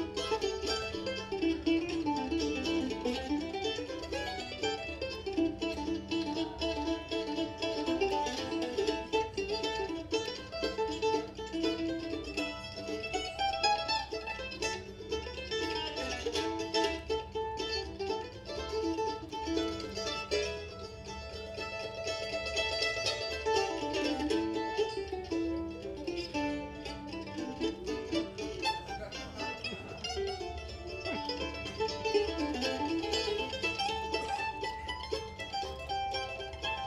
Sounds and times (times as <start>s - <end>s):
Country: 0.0s - 36.8s
Guitar: 0.0s - 36.8s.